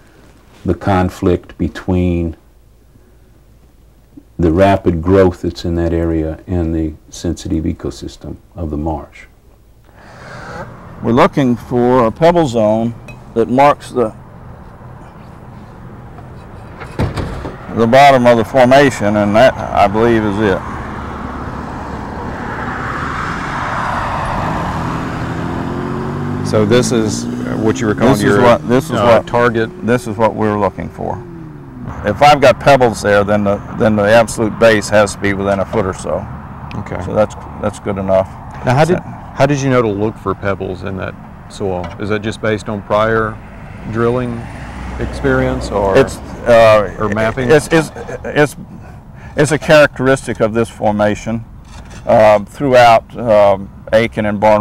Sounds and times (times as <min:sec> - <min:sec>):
Outside, rural or natural: 0:00.0 - 0:54.6
Speech: 0:00.6 - 0:02.4, 0:04.3 - 0:09.3, 0:11.0 - 0:14.2, 0:17.7 - 0:20.6, 0:26.5 - 0:31.2, 0:32.0 - 0:48.7, 0:49.4 - 0:51.4, 0:52.1 - 0:54.6.